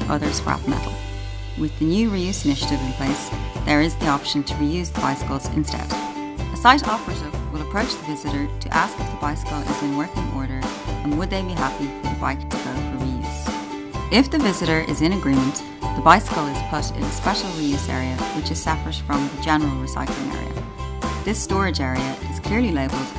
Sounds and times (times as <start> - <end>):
Speech: 0.0 - 1.0, 1.6 - 6.0, 6.6 - 13.5, 14.1 - 20.6, 21.2 - 23.1
Music: 0.0 - 23.1.